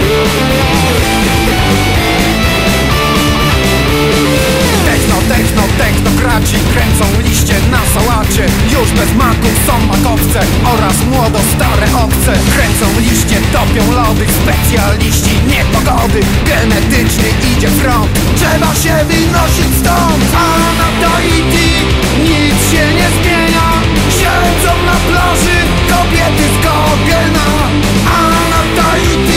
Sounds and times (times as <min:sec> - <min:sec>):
Techno: 0:00.0 - 0:29.3.